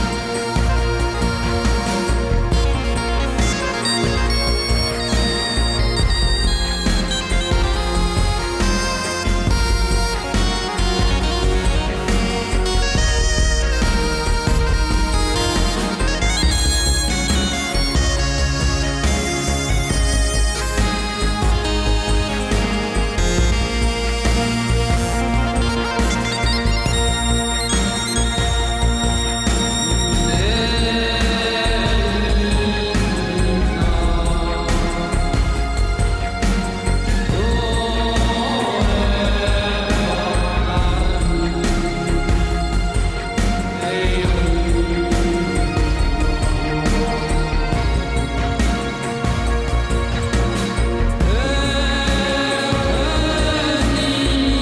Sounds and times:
Music: 0.0 - 54.6.

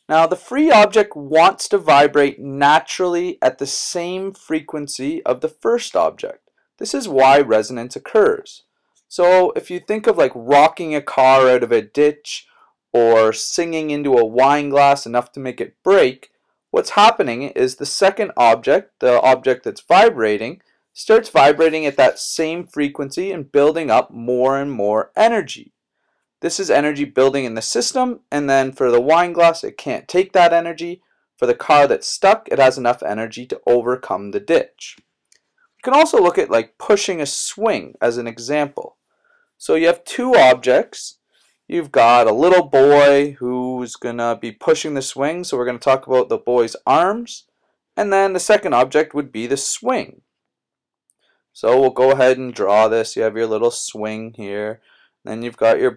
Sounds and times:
Speech: 0.0 - 12.4, 13.0 - 25.6, 26.4 - 35.0, 35.8 - 38.9, 39.6 - 41.1, 41.7 - 47.4, 48.0 - 50.1, 51.6 - 55.9.

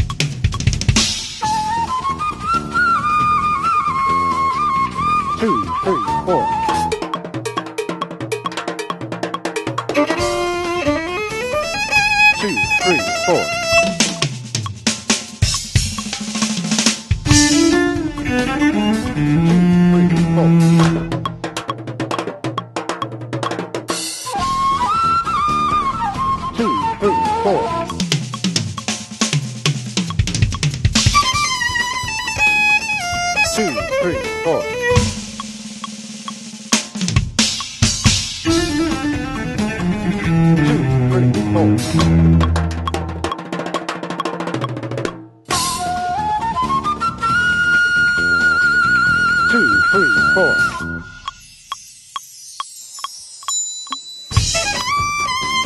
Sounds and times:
Music: 0.0 - 55.6
Speech: 5.4 - 6.6, 12.4 - 13.5, 26.6 - 27.8, 33.5 - 34.8, 41.1 - 41.8, 49.5 - 50.7.

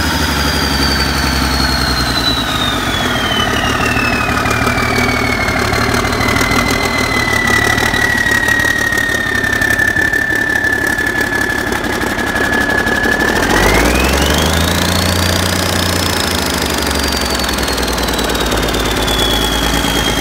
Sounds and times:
Engine: 0.0 - 20.2.

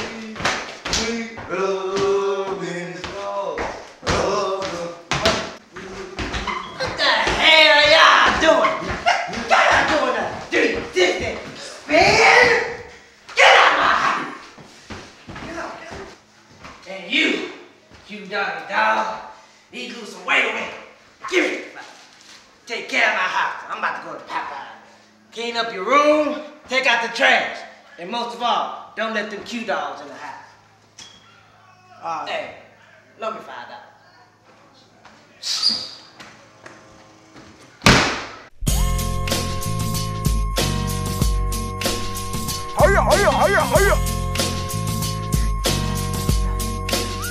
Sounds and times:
Speech: 0.0 - 5.1, 6.8 - 8.8, 9.4 - 12.8, 16.8 - 22.0, 22.7 - 24.8, 25.4 - 30.5, 31.6 - 35.4, 42.8 - 44.0.

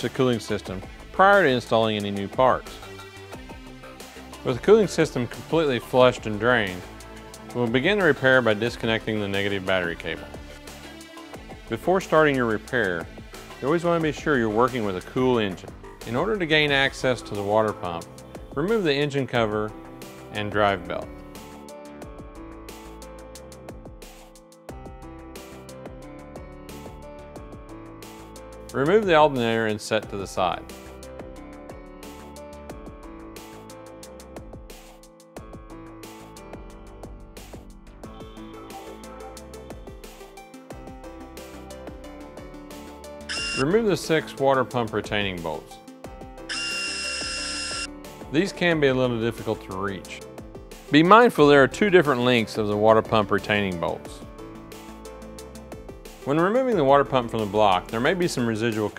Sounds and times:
Speech: 0.0 - 2.8, 4.4 - 6.9, 7.6 - 10.3, 11.7 - 19.7, 20.3 - 21.1, 28.7 - 30.7, 43.6 - 45.7, 48.3 - 50.2, 50.9 - 54.2, 56.3 - 58.9
Music: 0.0 - 58.9.

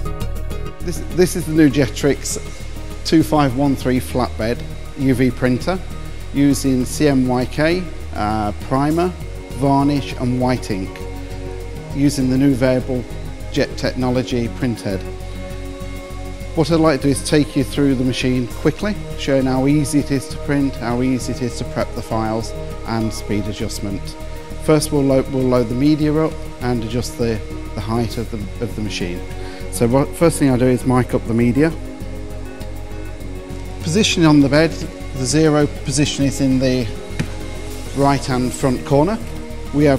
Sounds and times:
Music: 0.0 - 39.9
Speech: 0.9 - 2.4, 3.1 - 5.8, 6.4 - 11.0, 12.0 - 15.1, 16.6 - 31.8, 33.8 - 37.0, 38.0 - 39.9.

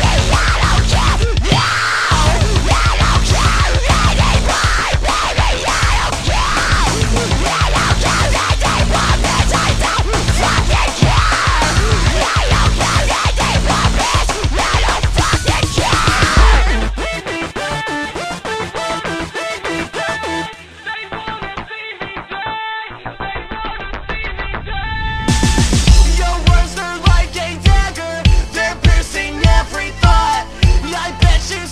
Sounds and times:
Soundtrack music: 0.0 - 21.7
Disco: 0.0 - 31.7.

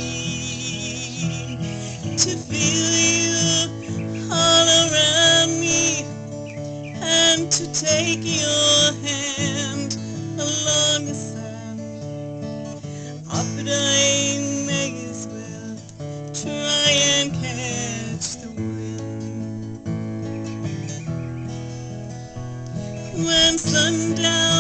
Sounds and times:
Music: 0.0 - 24.6.

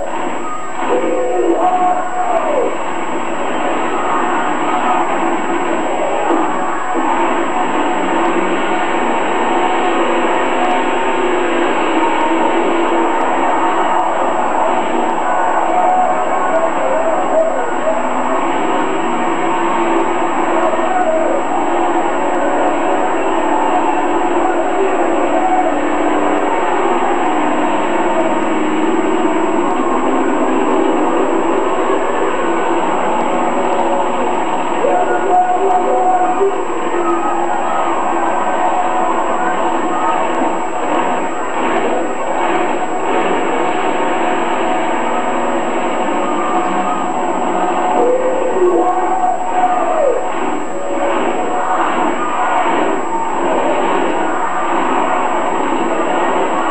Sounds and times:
Truck: 0.0 - 48.9.

